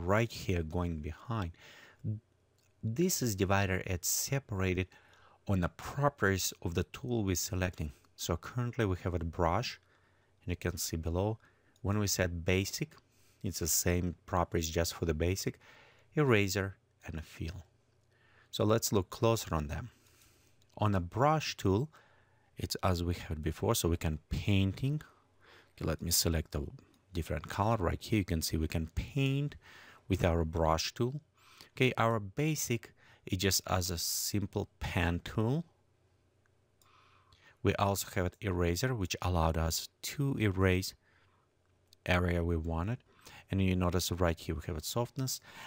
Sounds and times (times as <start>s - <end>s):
Speech: 0.0s - 9.8s, 10.4s - 15.6s, 16.2s - 17.7s, 18.5s - 20.0s, 20.8s - 22.0s, 22.6s - 25.2s, 25.8s - 35.8s, 37.6s - 41.0s, 42.0s - 45.6s.